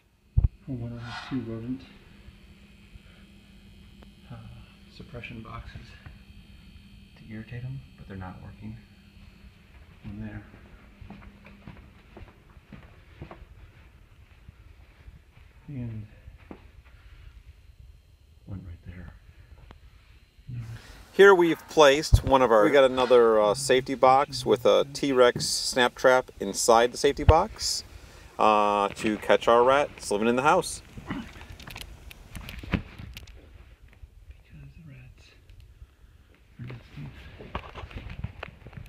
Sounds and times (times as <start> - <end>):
Speech: 0.7 - 2.0, 4.3 - 6.1, 7.2 - 8.8, 10.0 - 10.5, 15.7 - 16.2, 18.5 - 19.2, 20.5 - 27.8, 28.4 - 30.8, 34.4 - 35.4, 36.6 - 37.3.